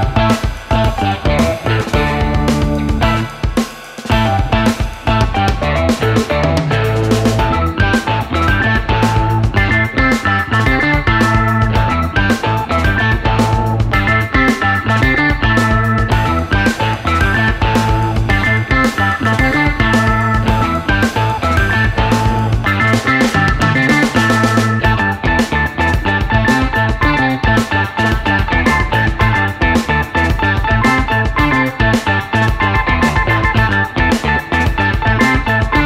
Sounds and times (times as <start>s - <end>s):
Music: 0.0s - 35.8s.